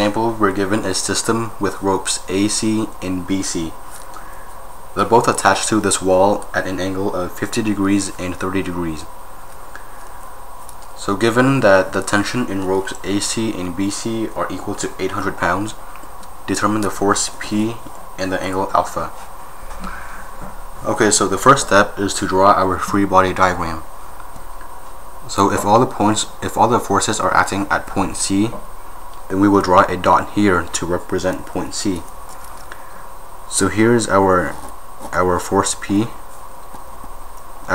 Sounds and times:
Speech: 0.0 - 3.8, 5.0 - 9.1, 11.0 - 15.8, 16.5 - 19.2, 20.8 - 23.9, 25.2 - 28.7, 29.3 - 32.1, 33.5 - 36.2.

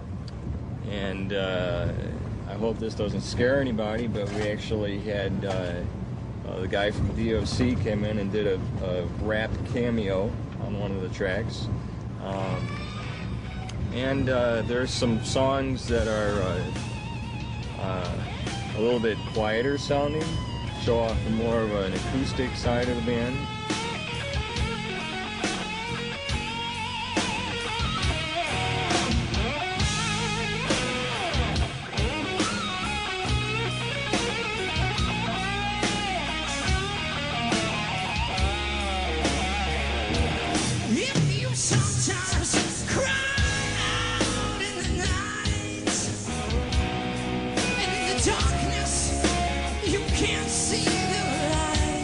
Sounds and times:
Speech: 0.9 - 5.9, 6.5 - 12.7, 14.0 - 16.8, 17.8 - 23.4
Pop music: 23.1 - 46.6, 47.6 - 52.0.

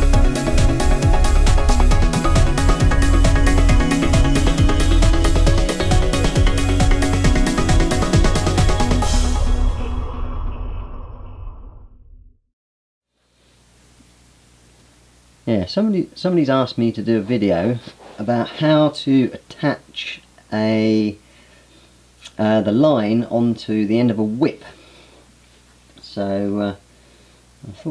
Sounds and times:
Music: 0.0 - 10.2
Speech: 15.5 - 21.2, 22.3 - 24.8, 26.0 - 26.8, 27.6 - 27.9.

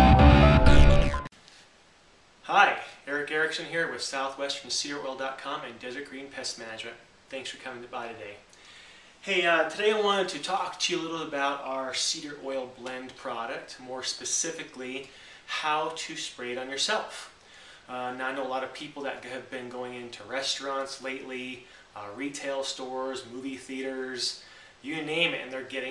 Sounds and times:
Speech: 2.4 - 8.5, 9.2 - 25.9.

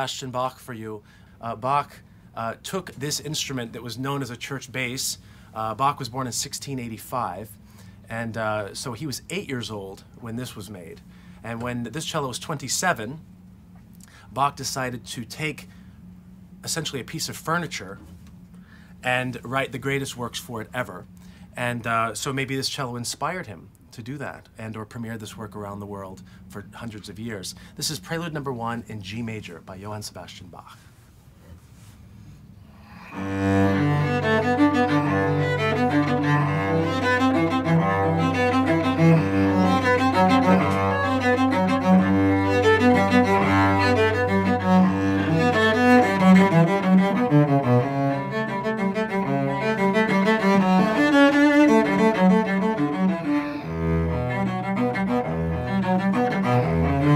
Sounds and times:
Speech: 0.0 - 13.2, 14.4 - 15.7, 16.6 - 18.0, 19.0 - 30.8.

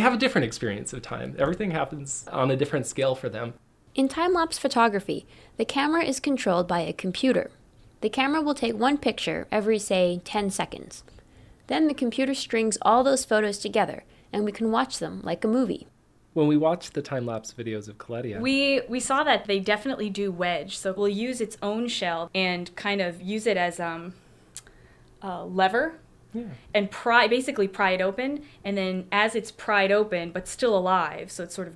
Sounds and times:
Speech: 0.0 - 11.0, 11.7 - 24.1, 25.2 - 31.7.

